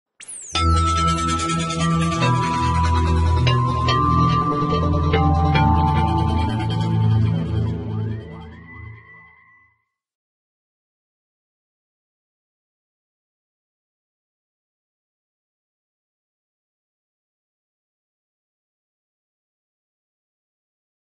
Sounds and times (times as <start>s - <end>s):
Music: 0.4s - 10.0s.